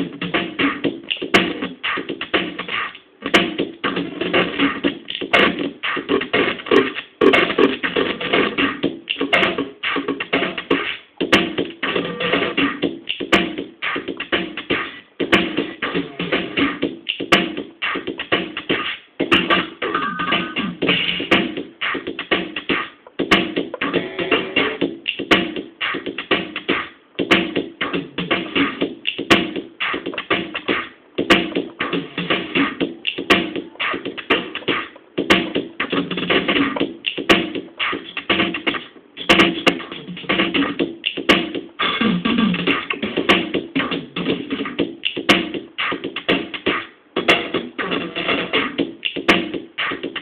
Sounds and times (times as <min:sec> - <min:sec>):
Drum machine: 0:00.0 - 0:50.2.